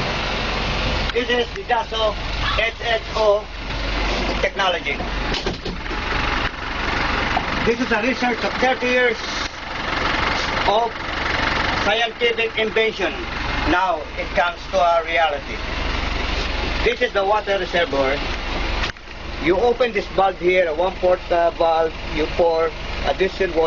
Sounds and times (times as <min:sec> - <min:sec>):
Speech: 0:01.1 - 0:03.5, 0:04.4 - 0:05.1, 0:07.7 - 0:09.3, 0:10.7 - 0:11.0, 0:11.8 - 0:15.6, 0:16.8 - 0:18.2, 0:19.4 - 0:23.6.